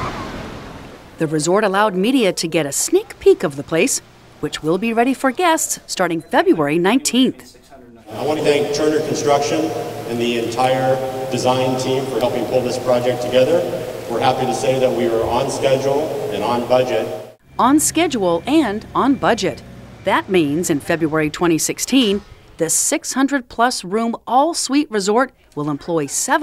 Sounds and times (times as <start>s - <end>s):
Speech: 1.2s - 26.4s.